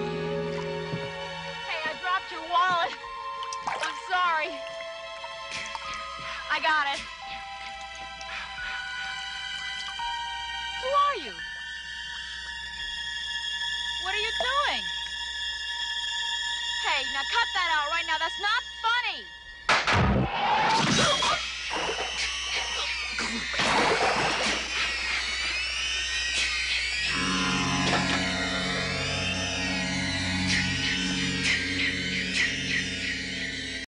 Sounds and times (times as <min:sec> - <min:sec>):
Music: 0:00.0 - 0:33.8.